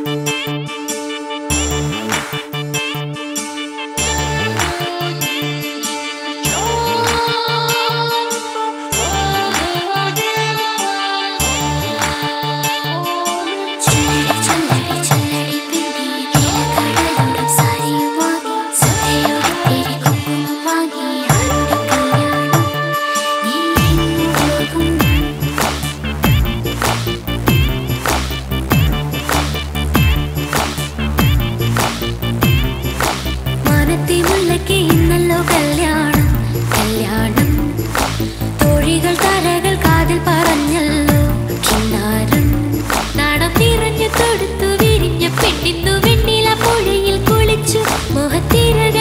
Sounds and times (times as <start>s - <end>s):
Music: 0.0s - 49.0s.